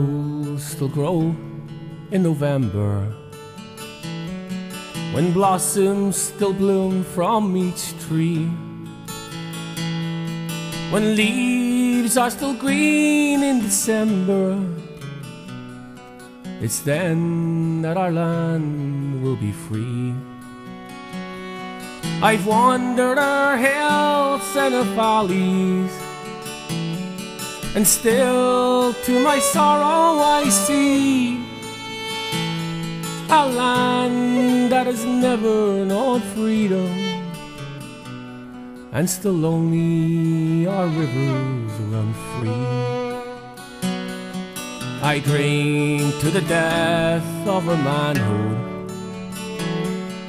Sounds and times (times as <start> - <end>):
Music: 0.0 - 50.2.